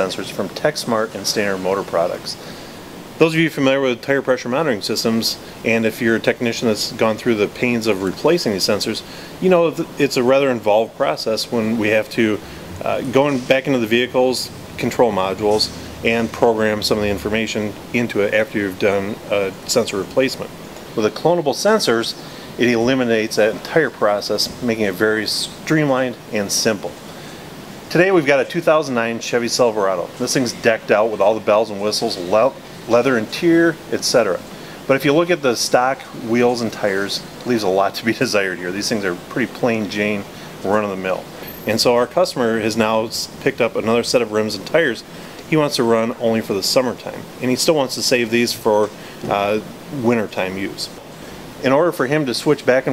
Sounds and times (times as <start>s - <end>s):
Speech: 0.0s - 2.5s, 3.2s - 27.0s, 27.9s - 51.0s, 51.6s - 52.9s.